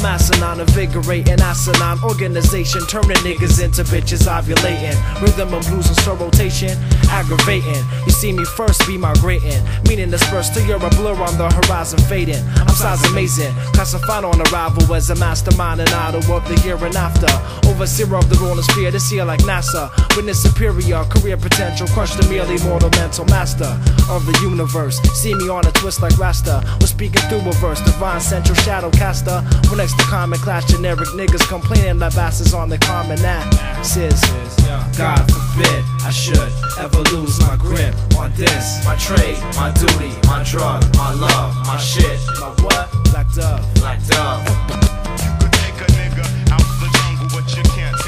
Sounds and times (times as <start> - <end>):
Music: 0.0 - 48.0.